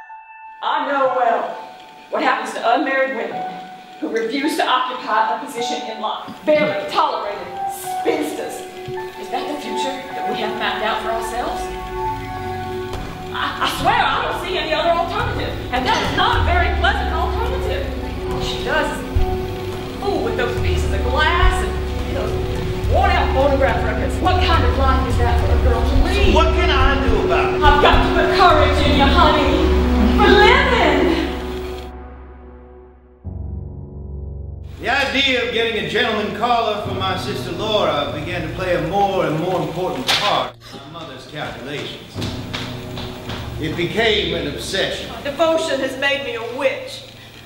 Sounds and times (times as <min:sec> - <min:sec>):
Music: 0:00.0 - 0:47.4.